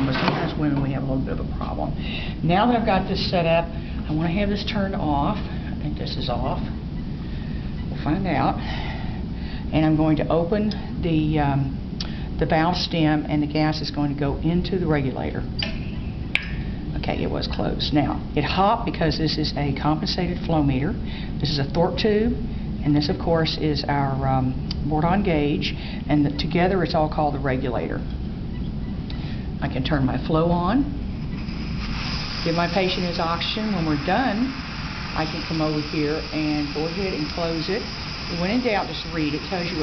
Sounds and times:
Speech: 0.0 - 6.7, 8.0 - 8.6, 12.4 - 15.5, 17.0 - 28.1, 29.6 - 30.9.

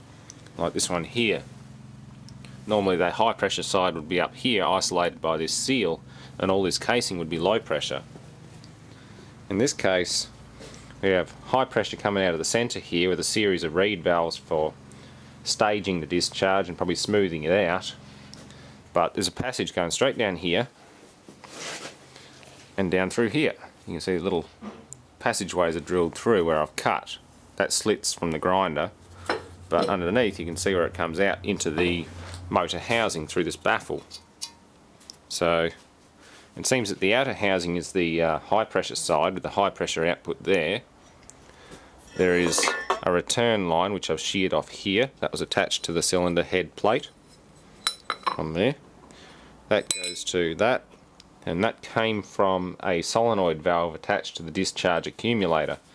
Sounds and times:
Speech: 0.6 - 1.5, 2.7 - 8.0, 9.5 - 10.4, 11.0 - 14.8, 15.4 - 18.0, 19.0 - 20.8, 22.8 - 24.6, 25.2 - 29.0, 29.7 - 34.2, 35.3 - 35.8, 36.6 - 40.9, 42.2 - 47.1, 48.3 - 48.8, 49.7 - 55.9.

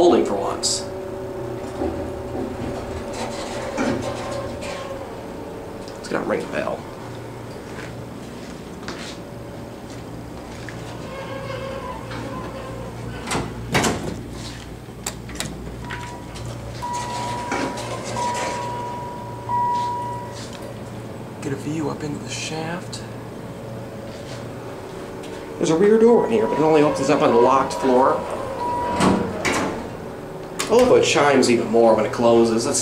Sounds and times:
Speech: 0.0 - 0.9, 6.0 - 6.8, 21.4 - 23.1, 25.6 - 28.2, 30.7 - 32.8
Sliding door: 1.6 - 5.1, 16.8 - 20.5, 26.0 - 30.0.

